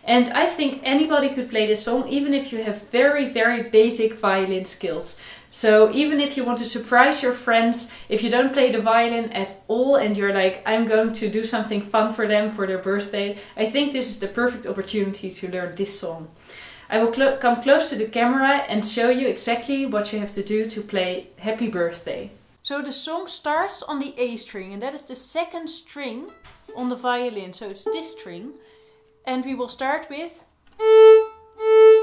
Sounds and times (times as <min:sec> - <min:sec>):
Speech: 0:00.0 - 0:28.6, 0:29.3 - 0:30.5.